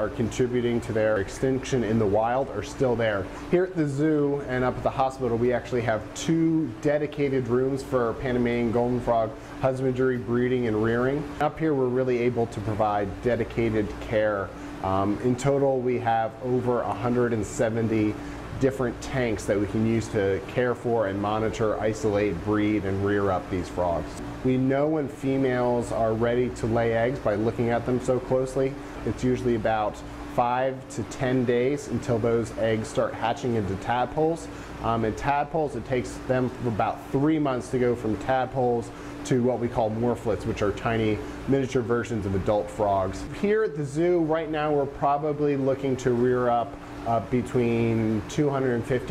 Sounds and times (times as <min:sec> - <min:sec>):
Speech: 0:00.0 - 0:49.1.